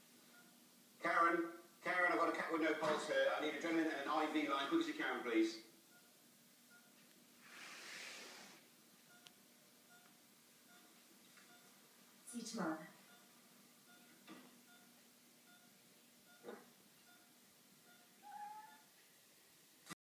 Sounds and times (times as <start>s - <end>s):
Speech: 1.0s - 5.7s, 12.3s - 12.9s
Meow: 18.2s - 18.9s.